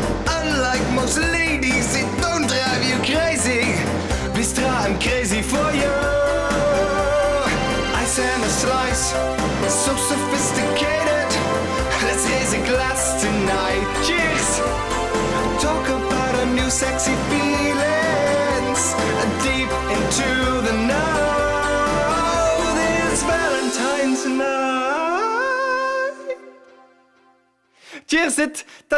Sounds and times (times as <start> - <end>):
Music: 0.0 - 28.9
Male singing: 0.3 - 14.7, 15.5 - 26.5.